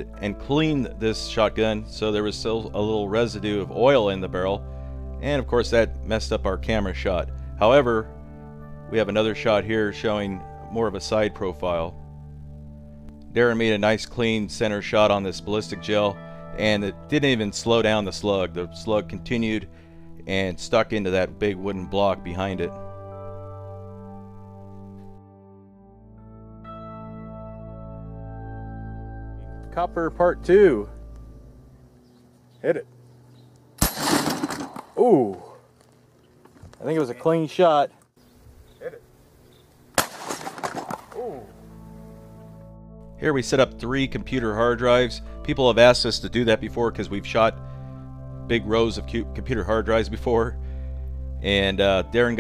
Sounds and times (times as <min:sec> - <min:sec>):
Speech: 0:00.0 - 0:04.6, 0:05.2 - 0:08.1, 0:08.9 - 0:12.0, 0:13.4 - 0:19.7, 0:20.3 - 0:22.8, 0:29.8 - 0:31.0, 0:32.6 - 0:32.9, 0:35.0 - 0:35.6, 0:36.8 - 0:37.9, 0:38.8 - 0:39.1, 0:43.2 - 0:47.6, 0:48.5 - 0:50.6, 0:51.4 - 0:52.4
Music: 0:00.0 - 0:34.1, 0:38.2 - 0:52.4
Outside, rural or natural: 0:26.7 - 0:52.4.